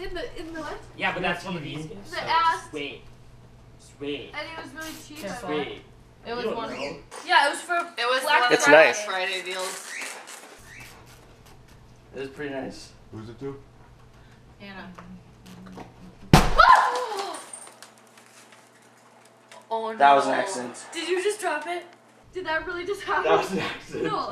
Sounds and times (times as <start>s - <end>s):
Whack, thwack: 16.3s - 16.8s.